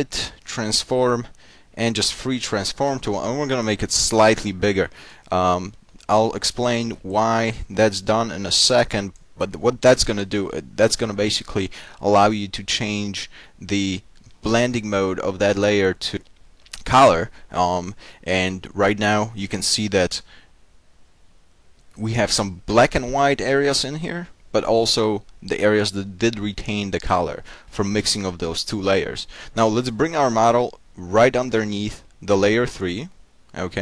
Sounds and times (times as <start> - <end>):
Speech: 0.0 - 20.3, 22.0 - 33.8.